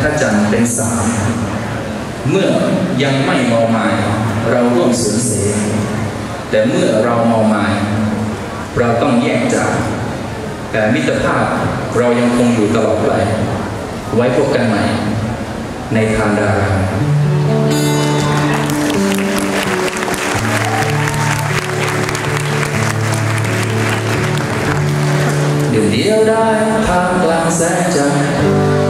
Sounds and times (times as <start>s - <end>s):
Speech: 0.0s - 1.4s, 2.2s - 8.1s, 8.7s - 10.0s, 10.7s - 15.2s, 15.9s - 17.0s, 25.7s - 28.5s.